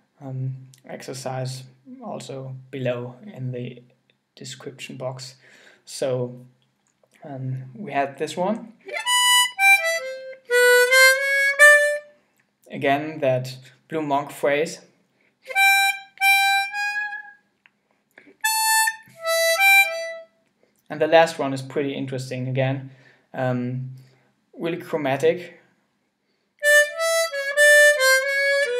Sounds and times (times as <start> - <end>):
Inside, small room: 0.0 - 28.7
Speech: 0.2 - 3.8, 4.4 - 6.5, 7.2 - 8.8, 12.7 - 14.9, 20.9 - 24.0, 24.6 - 25.6
Harmonica: 8.9 - 12.1, 15.4 - 17.4, 18.4 - 20.4, 26.6 - 28.7.